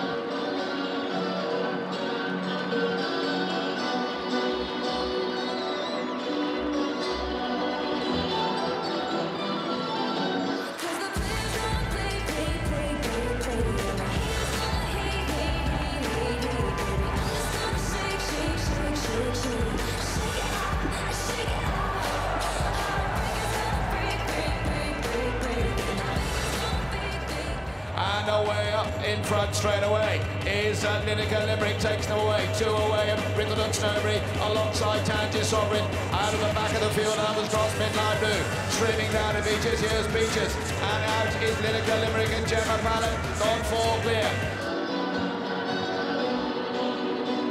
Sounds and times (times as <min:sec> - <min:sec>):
Music: 0:00.0 - 0:47.5.